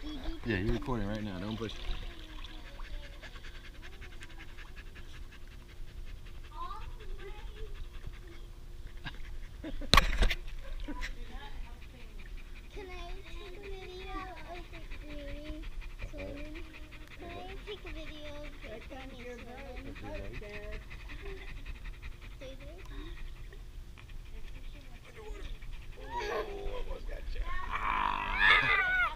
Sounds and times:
Dog: 0:00.0 - 0:27.7.

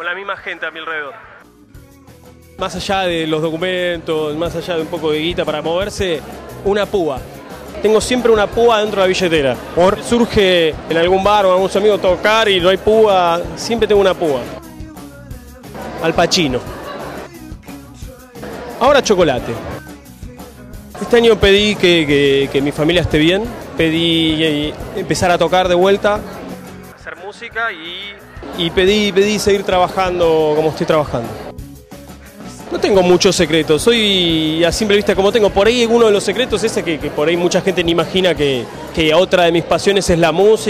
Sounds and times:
Speech: 0:00.0 - 0:01.3, 0:02.6 - 0:07.2, 0:07.8 - 0:14.5, 0:16.0 - 0:16.6, 0:18.8 - 0:19.7, 0:21.0 - 0:26.2, 0:27.0 - 0:31.4, 0:32.7 - 0:40.7
Music: 0:00.1 - 0:40.7.

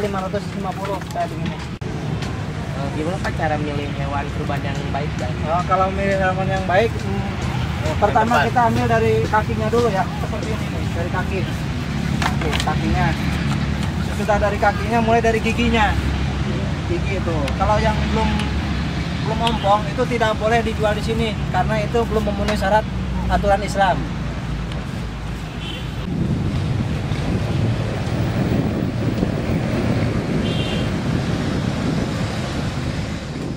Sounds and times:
Speech: 0:00.0 - 0:01.7, 0:02.8 - 0:11.6, 0:19.2 - 0:24.1.

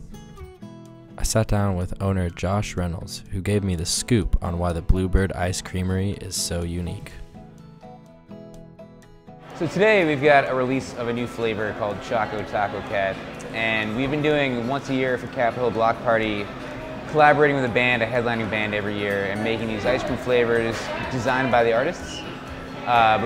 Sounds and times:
Music: 0:00.0 - 0:23.2
Speech: 0:01.2 - 0:07.2, 0:09.6 - 0:16.5, 0:17.1 - 0:23.2.

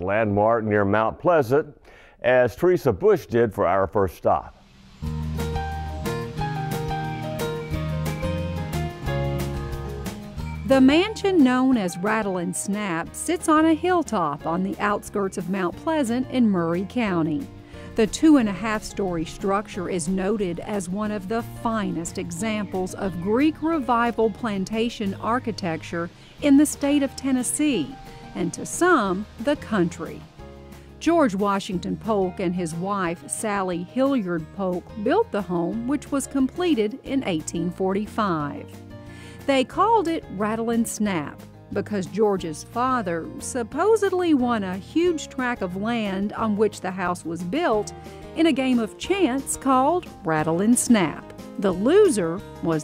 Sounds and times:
Speech: 0:00.0 - 0:04.5, 0:10.7 - 0:17.4, 0:18.0 - 0:30.2, 0:31.0 - 0:38.6, 0:39.5 - 0:52.8
Music: 0:03.4 - 0:52.8.

